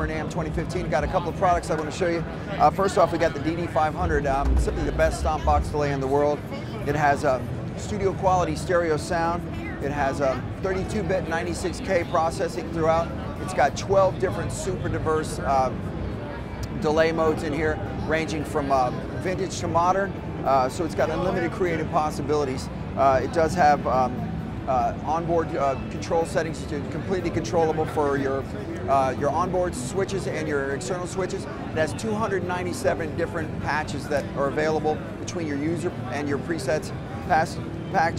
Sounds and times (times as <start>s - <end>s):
Speech: 0.0s - 38.1s.